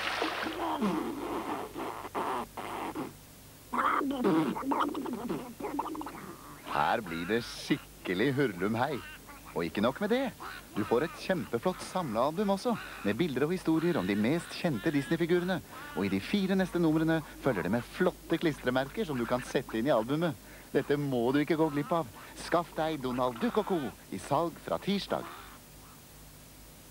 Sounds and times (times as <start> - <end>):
Speech: 3.8 - 25.4.